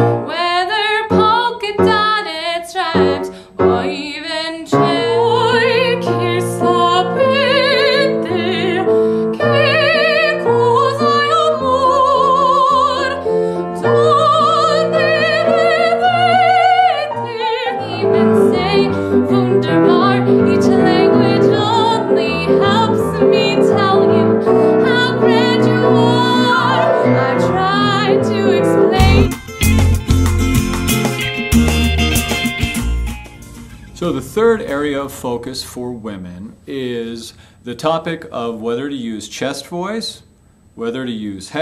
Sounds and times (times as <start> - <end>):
Music: 0.0 - 35.0
Female singing: 0.3 - 13.2, 13.8 - 29.3.